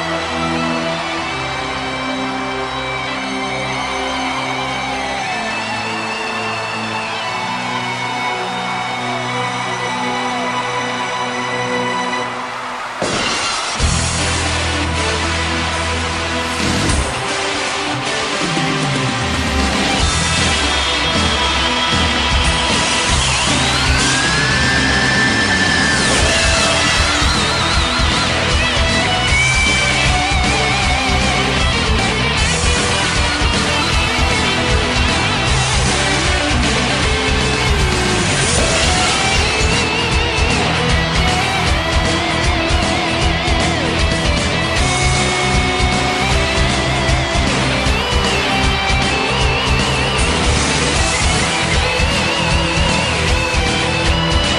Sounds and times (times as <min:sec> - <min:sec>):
Music: 0:00.0 - 0:54.5.